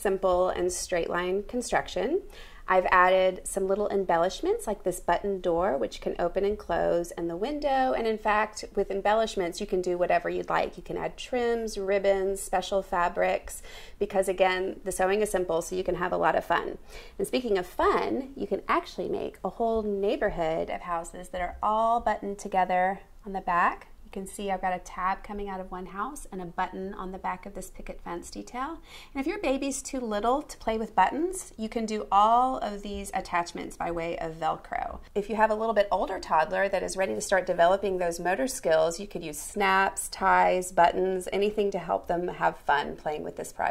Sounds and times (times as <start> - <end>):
Speech: 0.0 - 43.7.